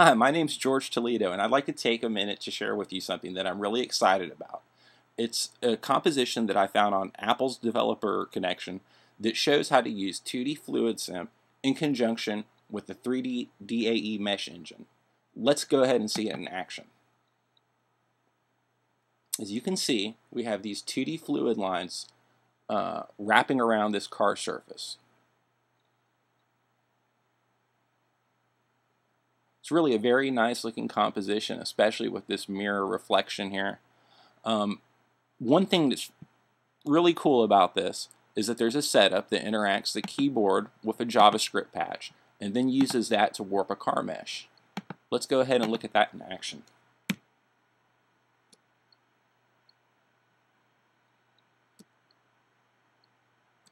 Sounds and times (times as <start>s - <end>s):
Speech: 0.0s - 17.0s, 19.4s - 25.1s, 29.6s - 33.8s, 34.4s - 36.3s, 36.9s - 46.7s.